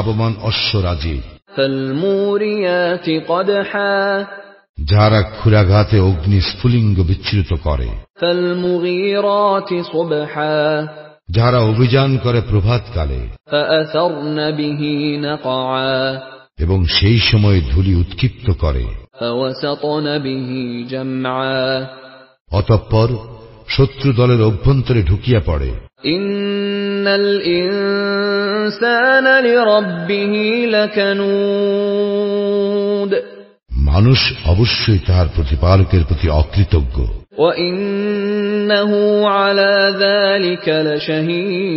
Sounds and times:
Speech: 0.0 - 4.2, 4.8 - 21.9, 22.5 - 26.4, 33.1 - 38.1.

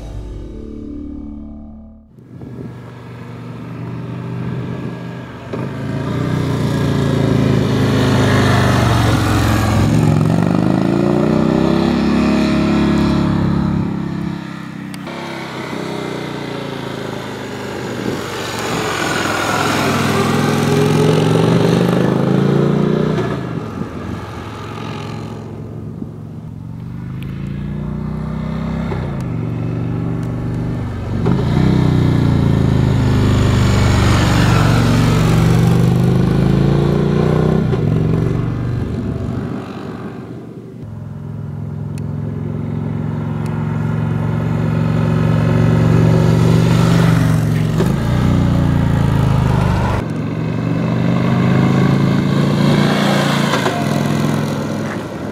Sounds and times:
Vehicle: 0.0 - 55.3
Accelerating, revving, vroom: 3.5 - 25.6, 26.9 - 40.4, 41.9 - 55.3.

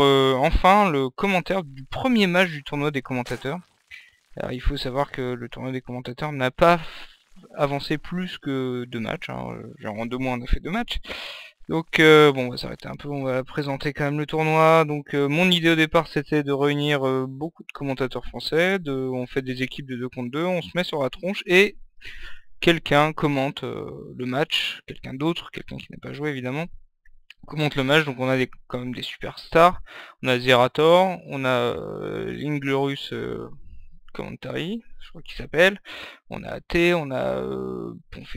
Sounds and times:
Speech: 0.0 - 3.6, 4.4 - 21.8, 22.6 - 26.7, 27.3 - 38.3.

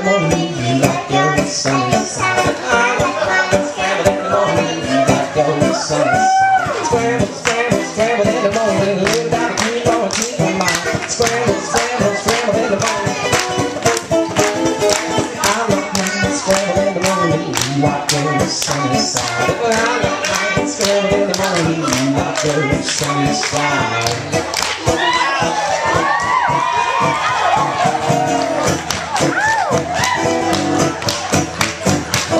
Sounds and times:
Male singing: 0.0 - 13.4, 15.4 - 24.3
Child singing: 0.0 - 14.2, 14.9 - 24.4
Music: 0.0 - 32.3.

